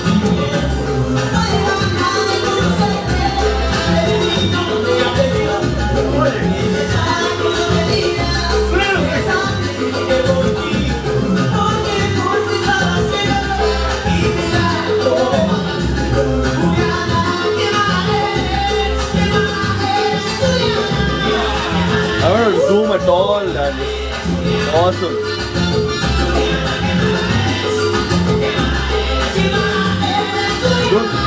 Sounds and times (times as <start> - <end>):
Music: 0.0 - 31.2
Speech: 22.2 - 23.8, 24.7 - 25.2.